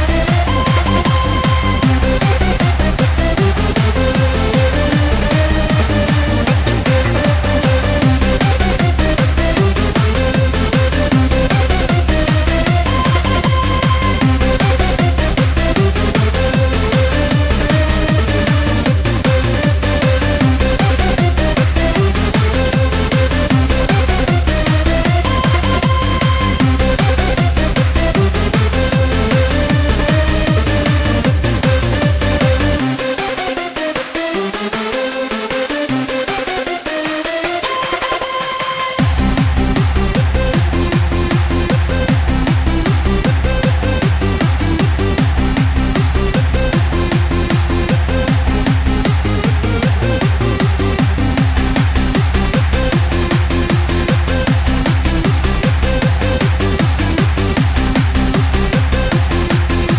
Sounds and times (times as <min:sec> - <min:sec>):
Techno: 0:00.0 - 0:59.9.